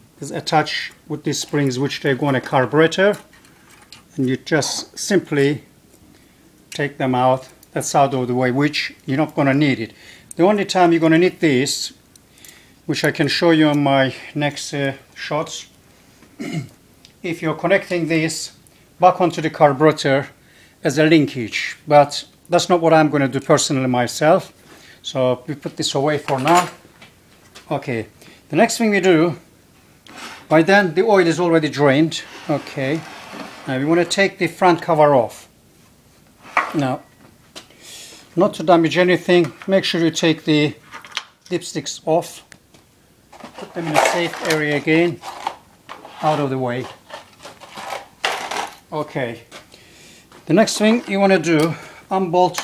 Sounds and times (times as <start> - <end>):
Speech: 0.2 - 3.3, 4.2 - 5.7, 6.8 - 12.0, 12.9 - 15.8, 17.2 - 26.8, 27.7 - 29.4, 30.5 - 33.1, 33.7 - 35.5, 36.7 - 37.1, 38.4 - 40.8, 41.5 - 42.5, 43.6 - 45.2, 46.1 - 47.0, 48.9 - 49.6, 50.4 - 52.6.